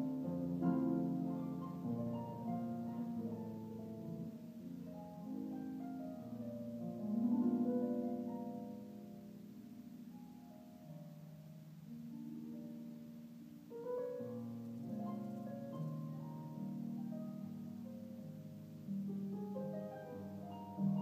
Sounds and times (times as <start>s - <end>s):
Harp: 0.0s - 21.0s.